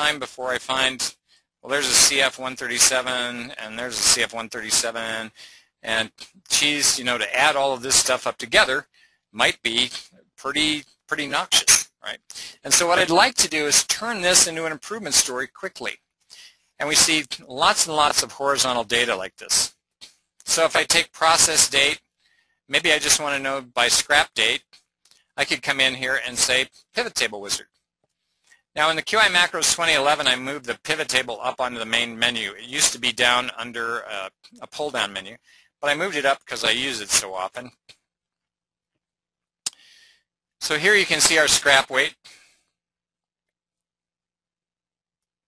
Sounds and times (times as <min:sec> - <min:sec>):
Speech: 0:00.0 - 0:19.7, 0:20.4 - 0:22.0, 0:22.7 - 0:24.7, 0:25.4 - 0:27.6, 0:28.8 - 0:38.0, 0:40.6 - 0:42.4.